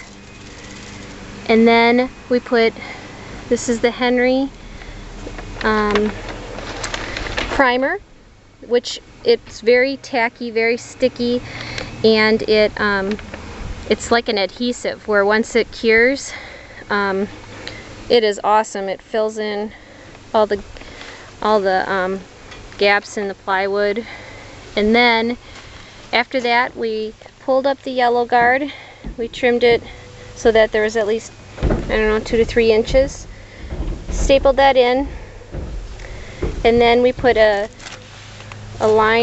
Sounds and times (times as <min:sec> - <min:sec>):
Speech: 0:01.5 - 0:02.8, 0:03.5 - 0:04.5, 0:05.6 - 0:06.2, 0:07.6 - 0:08.0, 0:08.6 - 0:11.4, 0:12.0 - 0:13.2, 0:13.9 - 0:17.3, 0:18.1 - 0:19.7, 0:21.4 - 0:22.2, 0:22.8 - 0:24.1, 0:24.8 - 0:25.4, 0:26.2 - 0:31.3, 0:31.9 - 0:33.2, 0:34.2 - 0:35.1, 0:36.6 - 0:37.7, 0:38.8 - 0:39.2.